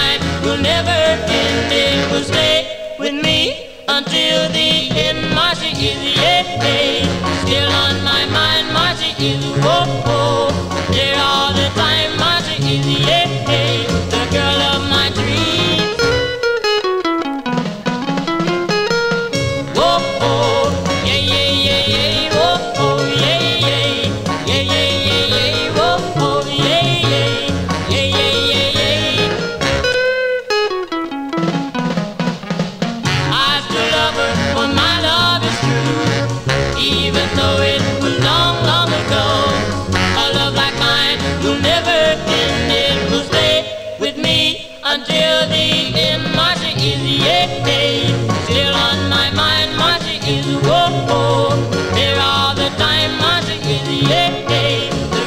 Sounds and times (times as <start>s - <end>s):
Music: 0.0s - 55.2s.